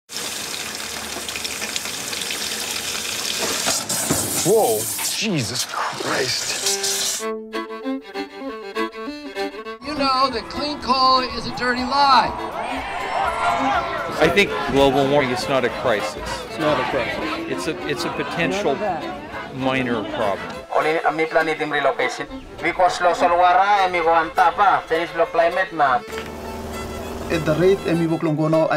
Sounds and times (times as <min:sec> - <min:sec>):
Music: 0:06.0 - 0:28.7.